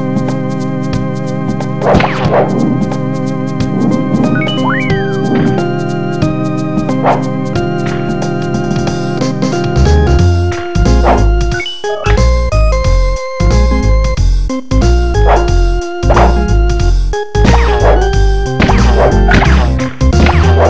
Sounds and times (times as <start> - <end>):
Video game music: 0.0 - 20.6.